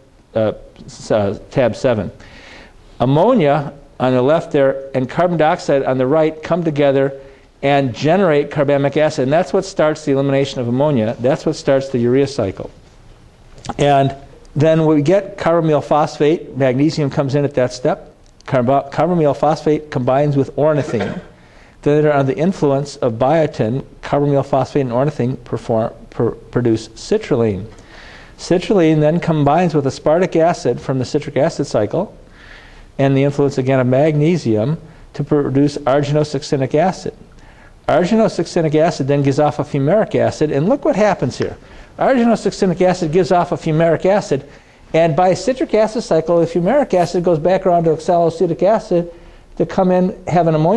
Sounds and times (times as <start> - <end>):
Speech: 0.0 - 2.2, 3.0 - 12.7, 13.7 - 27.7, 28.4 - 32.2, 33.0 - 37.2, 37.9 - 50.7.